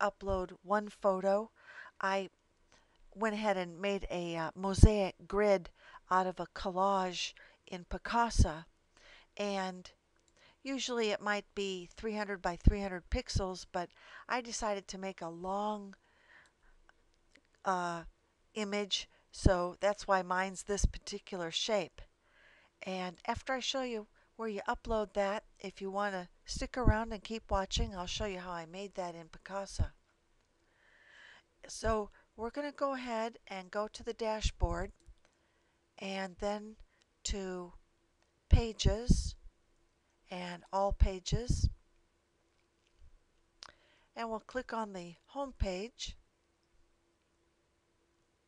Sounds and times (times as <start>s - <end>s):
Speech: 0.0s - 2.3s, 3.2s - 8.7s, 9.4s - 9.9s, 10.7s - 16.0s, 17.7s - 22.0s, 22.8s - 30.0s, 31.7s - 35.0s, 36.0s - 37.8s, 38.5s - 39.4s, 40.3s - 41.8s, 44.2s - 46.2s.